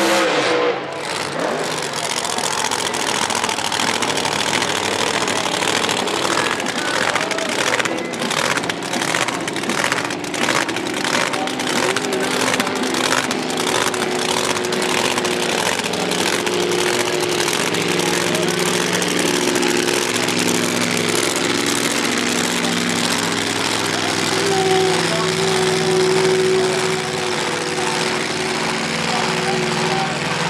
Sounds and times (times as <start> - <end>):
Speech: 1.4 - 9.7, 11.1 - 14.1, 15.4 - 20.4, 22.4 - 30.4.